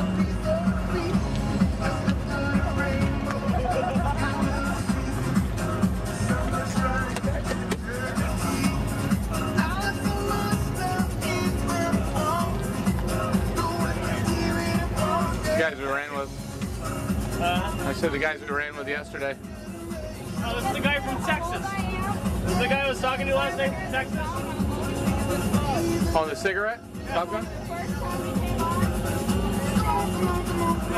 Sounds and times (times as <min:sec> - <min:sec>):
Music: 0:00.0 - 0:30.9.